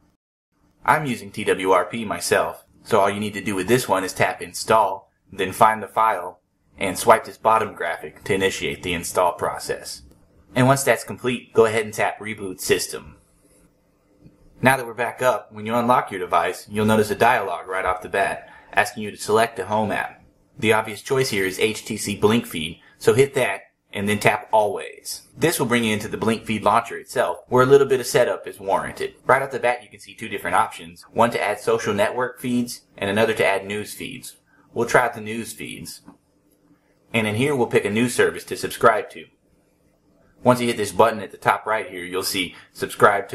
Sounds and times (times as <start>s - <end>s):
Speech: 0.9s - 13.2s, 14.6s - 36.1s, 37.1s - 39.3s, 40.4s - 43.3s.